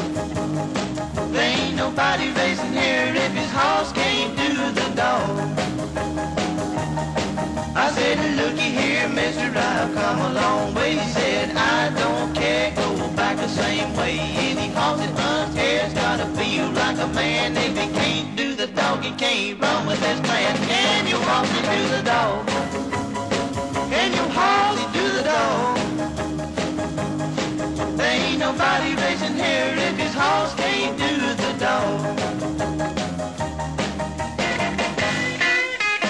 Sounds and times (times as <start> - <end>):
Music: 0.0 - 36.0.